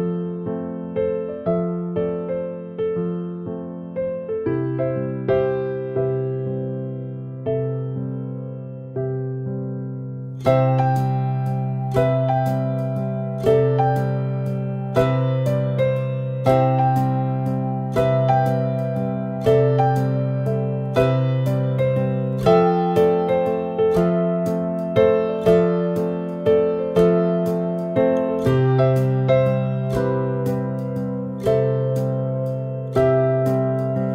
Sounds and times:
Music: 0:00.0 - 0:34.1.

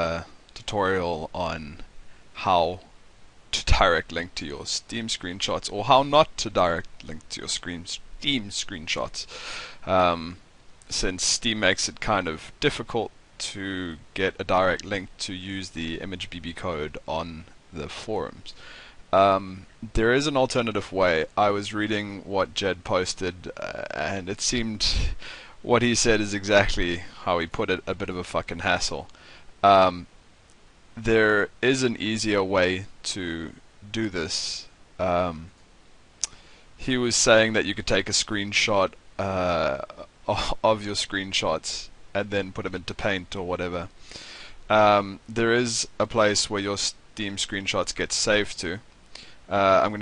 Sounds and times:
Speech: 0:00.0 - 0:02.9, 0:03.5 - 0:30.1, 0:31.0 - 0:35.5, 0:36.8 - 0:43.9, 0:44.7 - 0:48.8, 0:49.5 - 0:50.0.

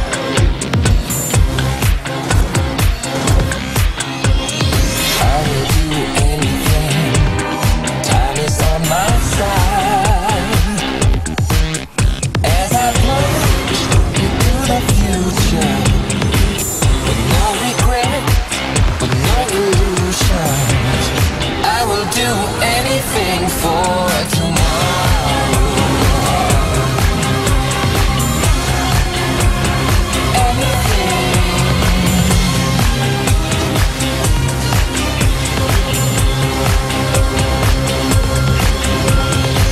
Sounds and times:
Music: 0:00.0 - 0:39.7.

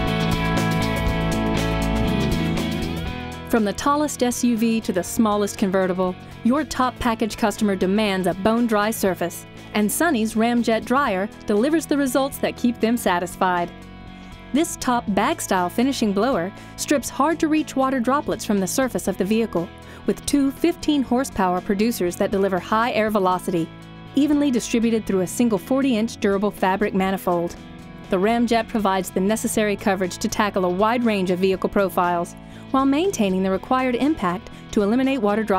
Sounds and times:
Music: 0:00.0 - 0:35.5
Speech: 0:03.5 - 0:13.7, 0:14.6 - 0:35.5.

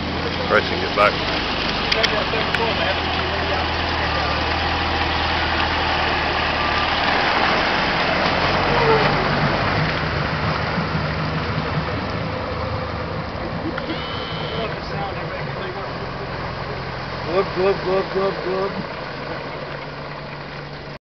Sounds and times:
Speech: 0:01.9 - 0:04.5, 0:14.5 - 0:18.8.

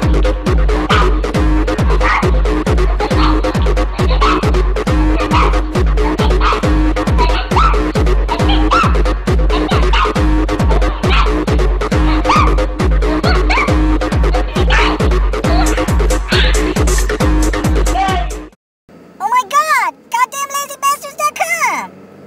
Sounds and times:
Techno: 0:00.0 - 0:18.5
Speech: 0:19.2 - 0:21.9.

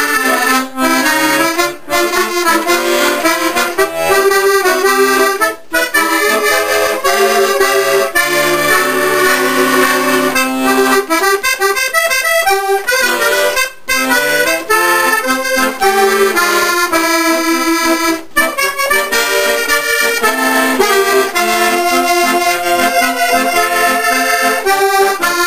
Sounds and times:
Accordion: 0:00.0 - 0:25.4.

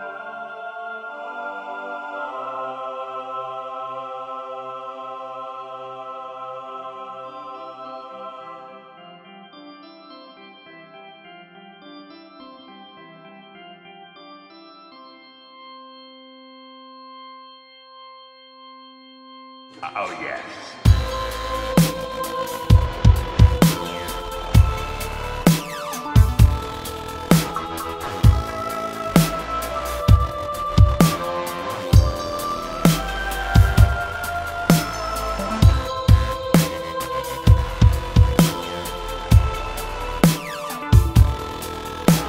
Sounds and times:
Speech: 0:19.8 - 0:20.9
Dubstep: 0:19.8 - 0:42.2.

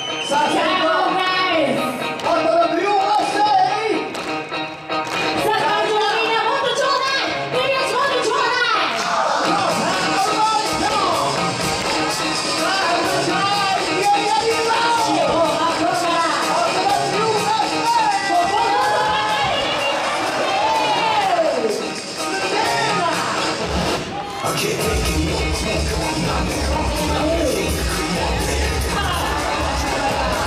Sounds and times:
Music: 0:00.0 - 0:30.4.

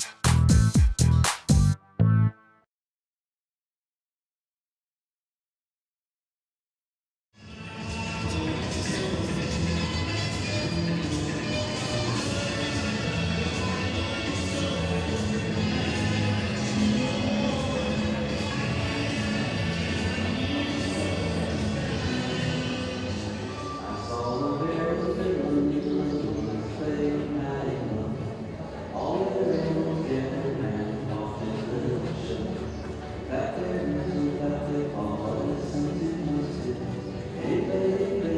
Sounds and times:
Music: 0:00.0 - 0:02.7, 0:07.4 - 0:38.3.

